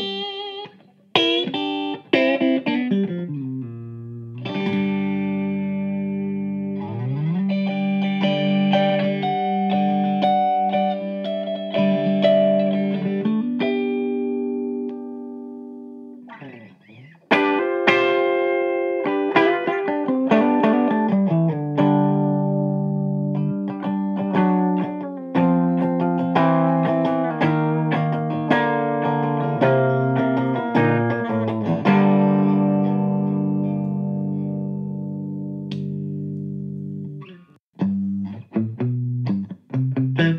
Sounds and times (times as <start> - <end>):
Electronic tuner: 0.0 - 40.3
Guitar: 0.0 - 40.3
Inside, small room: 0.0 - 40.3.